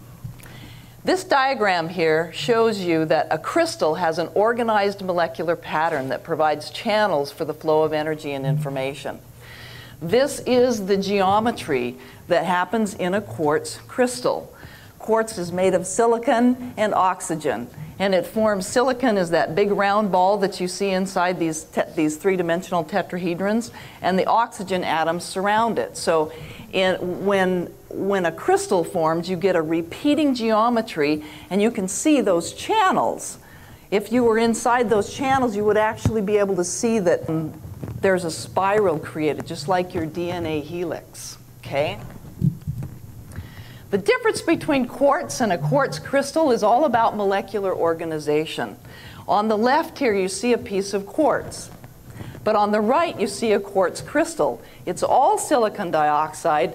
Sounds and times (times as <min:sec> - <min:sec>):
Speech: 0:01.1 - 0:09.2, 0:10.0 - 0:42.2, 0:44.0 - 0:51.8, 0:52.5 - 0:56.7.